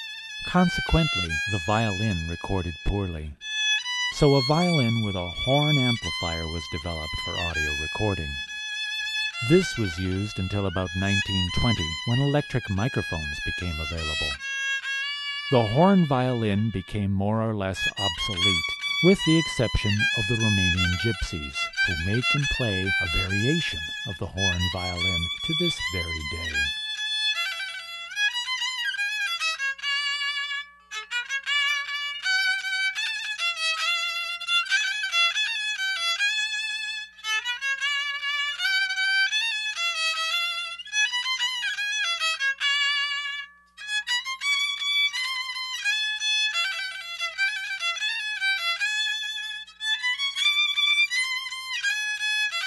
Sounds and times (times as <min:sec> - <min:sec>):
Violin, fiddle: 0:00.0 - 0:52.6
Speech: 0:00.4 - 0:03.4, 0:04.2 - 0:08.4, 0:09.4 - 0:14.4, 0:15.5 - 0:26.7.